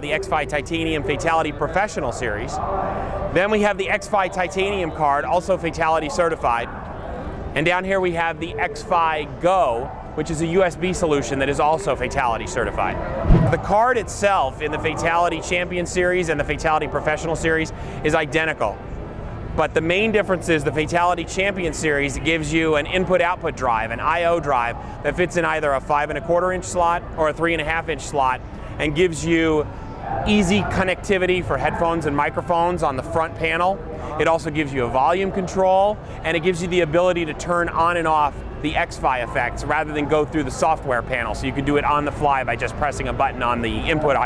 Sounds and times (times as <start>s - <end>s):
Speech: 0.0s - 18.8s, 19.5s - 44.2s.